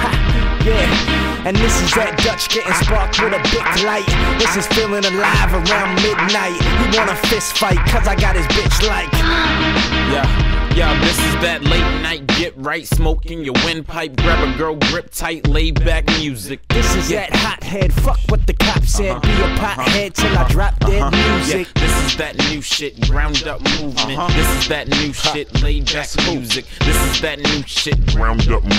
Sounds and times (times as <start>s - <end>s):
Music: 0.0s - 28.7s.